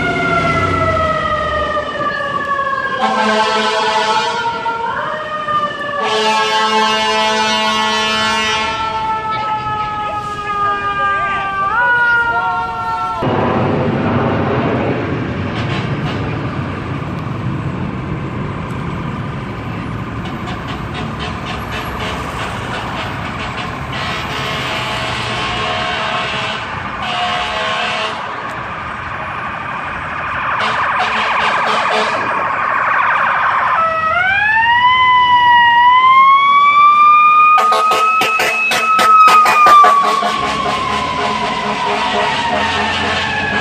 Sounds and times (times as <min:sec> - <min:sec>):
Fire engine, fire truck (siren): 0:00.0 - 0:43.6.